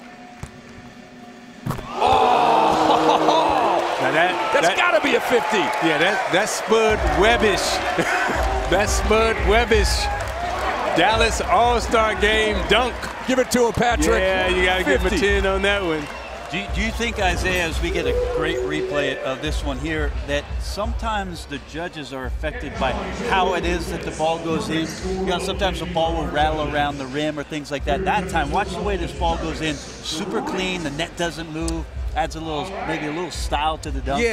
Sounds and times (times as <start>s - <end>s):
Speech: 4.0s - 7.8s, 8.7s - 10.1s, 11.0s - 34.3s.